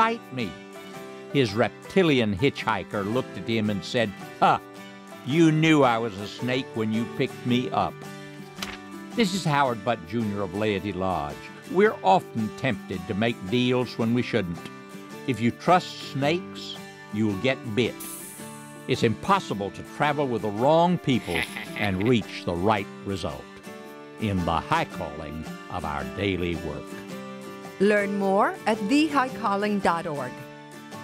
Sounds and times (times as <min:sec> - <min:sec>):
Speech: 0:00.0 - 0:00.6, 0:01.4 - 0:04.6, 0:05.3 - 0:07.9, 0:09.2 - 0:14.7, 0:15.3 - 0:18.3, 0:18.9 - 0:23.4, 0:24.2 - 0:26.8, 0:27.8 - 0:30.3
Music: 0:00.0 - 0:31.0.